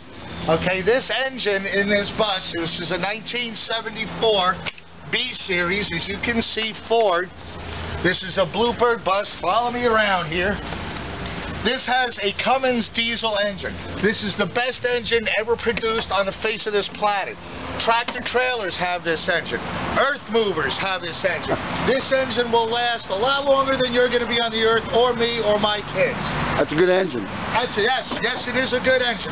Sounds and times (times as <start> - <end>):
Vehicle: 0.0 - 29.3
Speech: 0.5 - 7.3, 8.0 - 10.6, 11.6 - 29.3.